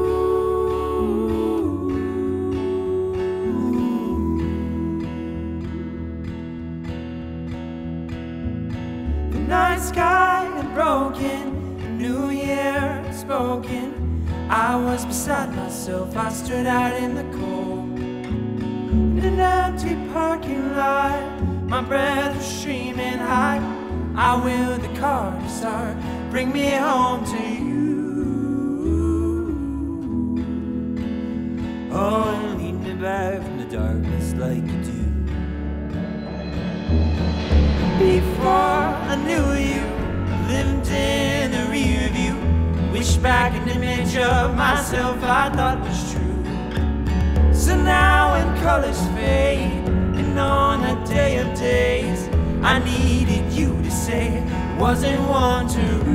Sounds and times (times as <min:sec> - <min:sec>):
Music: 0:00.0 - 0:56.1.